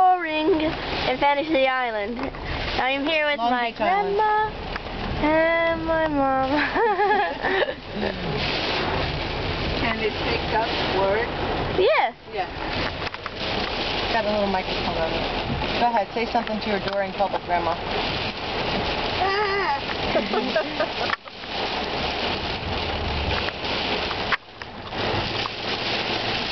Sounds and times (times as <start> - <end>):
Rain on surface: 0.0 - 26.5.